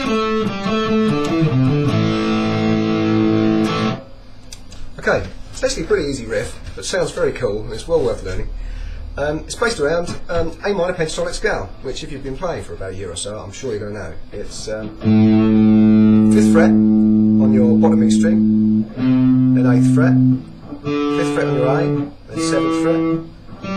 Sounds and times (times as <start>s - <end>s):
Electric guitar: 0.0s - 4.6s, 14.8s - 23.7s
Speech: 5.0s - 8.5s, 9.2s - 15.0s, 16.3s - 18.5s, 19.6s - 20.4s, 21.1s - 23.2s
Strum: 14.8s - 23.7s.